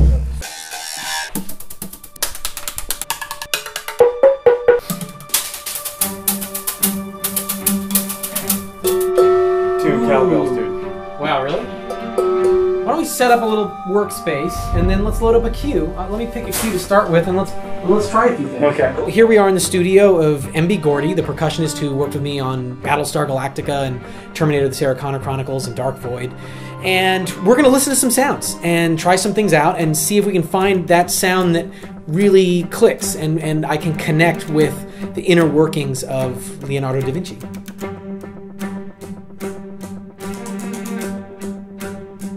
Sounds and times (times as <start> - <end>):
Music: 0.0 - 42.3
Speech: 9.8 - 11.7, 12.9 - 37.5.